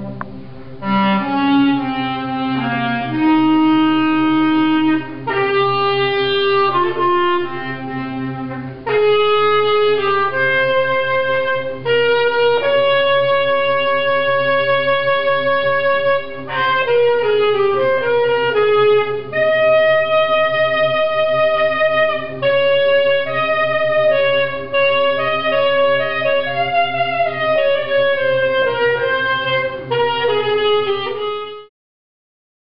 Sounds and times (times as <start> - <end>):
Brass instrument: 0.0 - 31.7
Clarinet: 0.0 - 31.7.